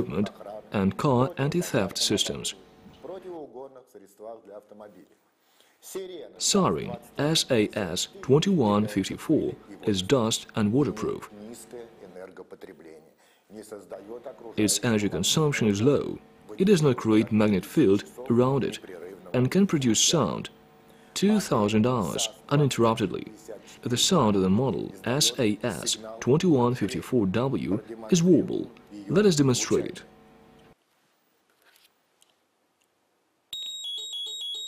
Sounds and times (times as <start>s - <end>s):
Speech: 0.0s - 5.2s, 5.8s - 20.6s, 21.2s - 30.1s.